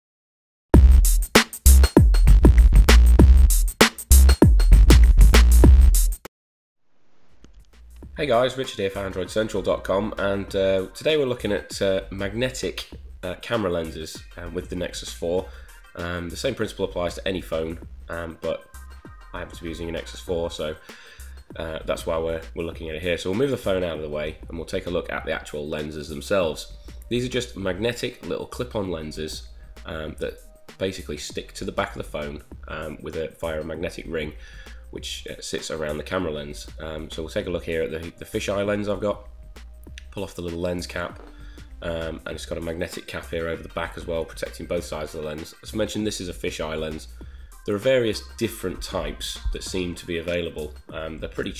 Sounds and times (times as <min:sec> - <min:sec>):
Drum machine: 0:00.8 - 0:06.3, 0:07.4 - 0:09.6, 0:48.5 - 0:50.8
Speech: 0:08.2 - 0:18.7, 0:19.3 - 0:20.8, 0:21.5 - 0:39.3, 0:40.0 - 0:41.2, 0:41.8 - 0:47.1, 0:47.7 - 0:51.5.